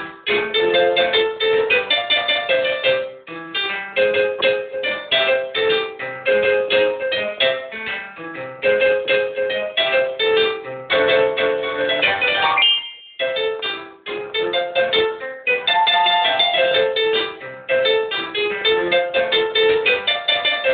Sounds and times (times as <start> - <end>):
Electric piano: 0.0 - 20.7.